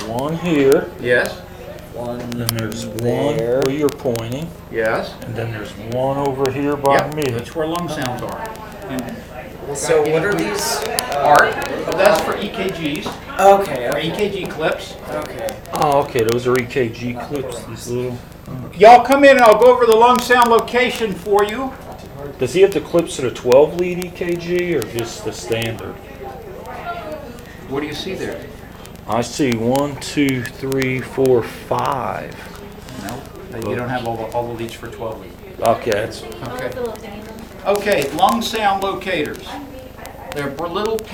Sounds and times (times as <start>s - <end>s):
Speech: 0.0s - 41.1s.